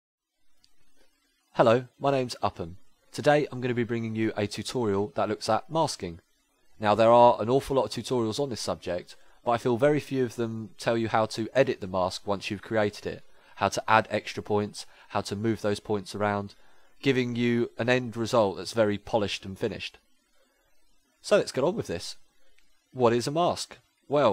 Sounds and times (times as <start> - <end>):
Narration, monologue: 0.4 - 24.3.